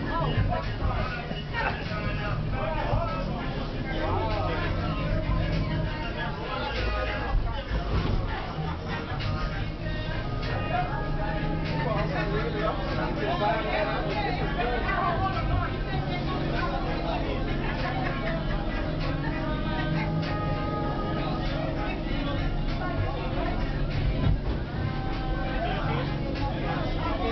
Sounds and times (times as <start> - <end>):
Speech: 0.0 - 27.3.